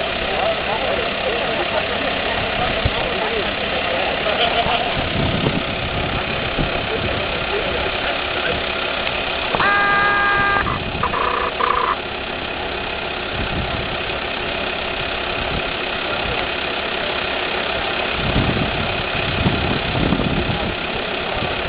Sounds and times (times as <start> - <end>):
Vehicle: 0.0 - 21.6.